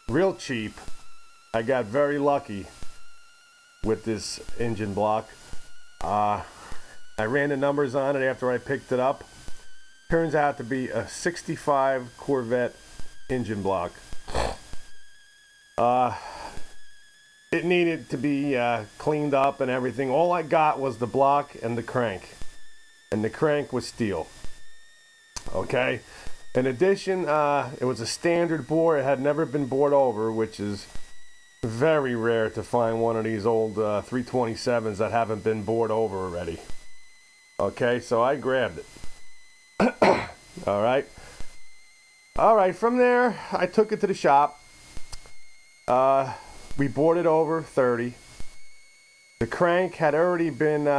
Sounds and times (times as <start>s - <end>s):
Speech: 0.1s - 0.8s, 1.6s - 2.7s, 3.9s - 5.4s, 6.0s - 6.5s, 7.2s - 9.2s, 10.1s - 14.0s, 15.8s - 16.3s, 17.6s - 22.4s, 23.2s - 24.3s, 25.4s - 26.0s, 26.6s - 30.9s, 31.7s - 36.7s, 37.6s - 38.9s, 39.8s - 41.1s, 42.4s - 44.6s, 45.9s - 48.2s, 49.4s - 50.9s.